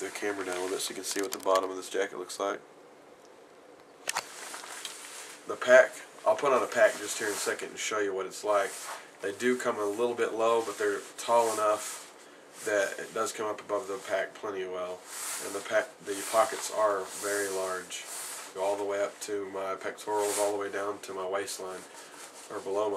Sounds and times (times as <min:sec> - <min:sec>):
Speech: 0:00.0 - 0:02.6, 0:05.5 - 0:11.9, 0:12.6 - 0:21.9, 0:22.5 - 0:22.9
Inside, small room: 0:00.0 - 0:22.9.